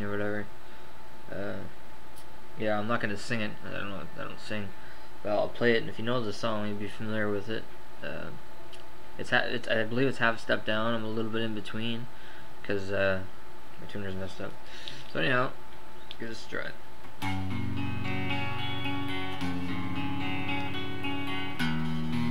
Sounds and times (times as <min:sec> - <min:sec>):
Speech: 0:00.0 - 0:00.5, 0:01.3 - 0:01.8, 0:02.6 - 0:08.4, 0:09.2 - 0:15.6, 0:16.2 - 0:16.8.